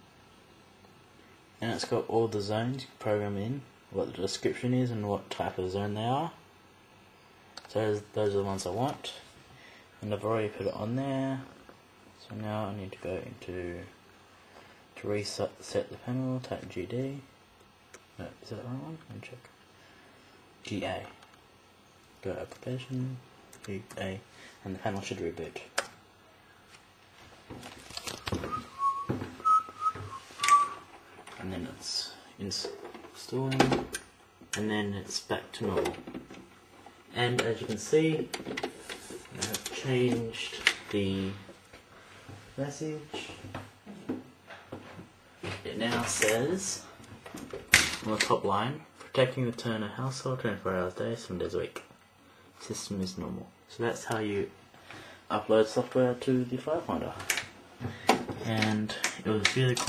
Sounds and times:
Speech: 0:01.6 - 0:06.4, 0:07.6 - 0:09.3, 0:10.0 - 0:11.6, 0:12.2 - 0:14.0, 0:15.0 - 0:17.4, 0:18.2 - 0:19.6, 0:20.6 - 0:21.2, 0:22.2 - 0:25.9, 0:31.3 - 0:33.9, 0:34.5 - 0:36.1, 0:37.1 - 0:38.4, 0:39.3 - 0:41.5, 0:42.6 - 0:43.6, 0:45.5 - 0:47.0, 0:48.0 - 0:51.9, 0:52.6 - 0:54.6, 0:55.3 - 0:57.4, 0:58.4 - 0:59.8.

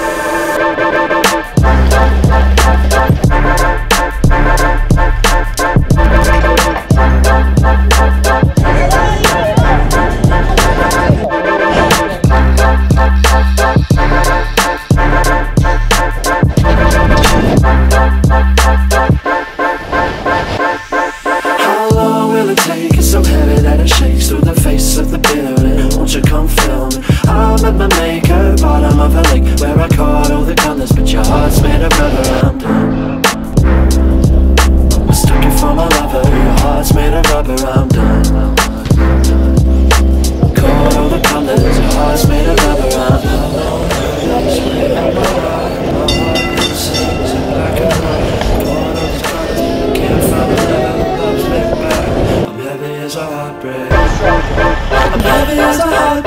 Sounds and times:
Music: 0:00.0 - 0:56.2.

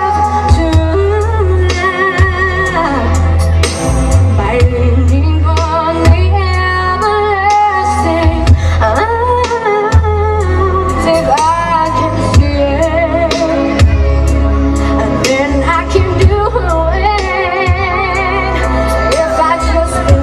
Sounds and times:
Female singing: 0:00.0 - 0:03.4, 0:04.3 - 0:14.0, 0:15.1 - 0:20.2
Music: 0:00.0 - 0:20.2.

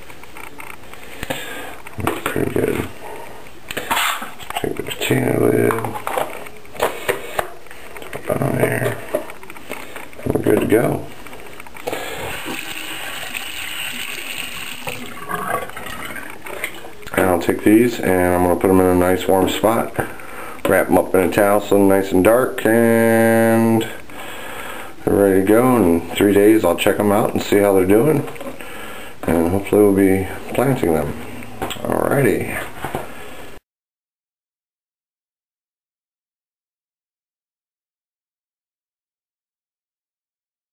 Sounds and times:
Sink (filling or washing): 0:12.1 - 0:16.2.

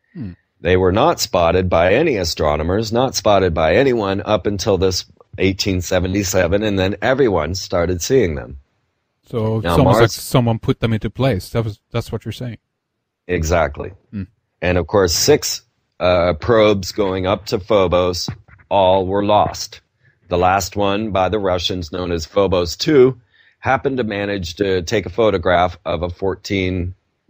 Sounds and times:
Speech: 0:00.2 - 0:08.6, 0:09.3 - 0:12.6, 0:13.3 - 0:27.0.

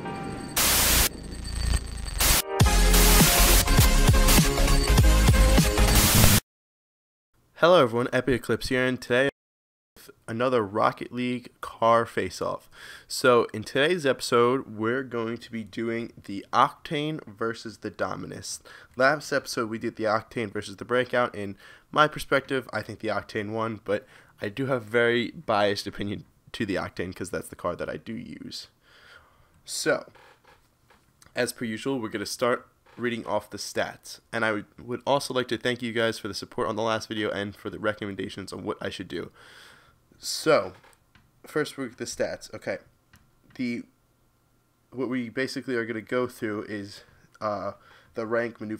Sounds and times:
Speech: 0:07.6 - 0:09.3, 0:10.0 - 0:28.8, 0:29.7 - 0:30.2, 0:31.3 - 0:39.4, 0:40.2 - 0:40.8, 0:41.5 - 0:42.9, 0:43.5 - 0:43.9, 0:45.0 - 0:48.7.

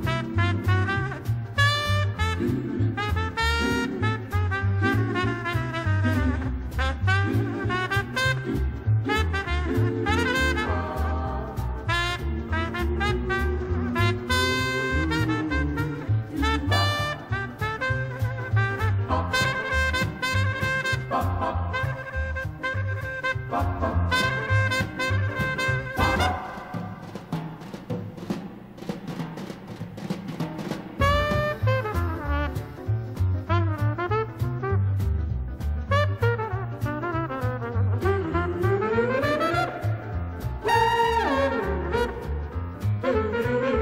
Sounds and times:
Timpani: 0:00.0 - 0:43.8.

